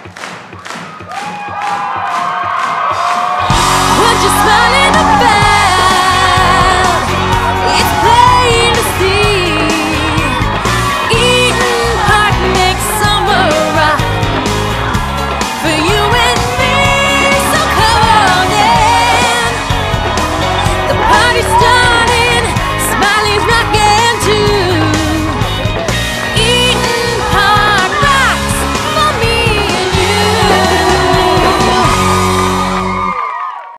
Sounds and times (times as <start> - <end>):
Independent music: 0.0 - 33.6.